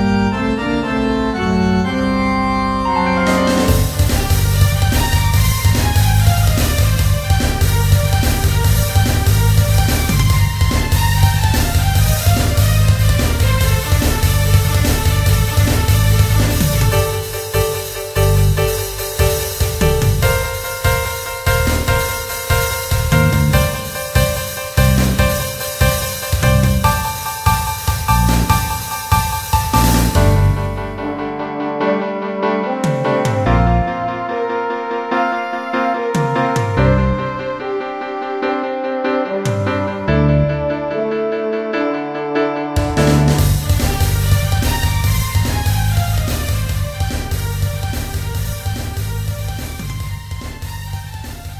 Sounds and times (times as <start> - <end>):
Theme music: 0.0 - 51.5.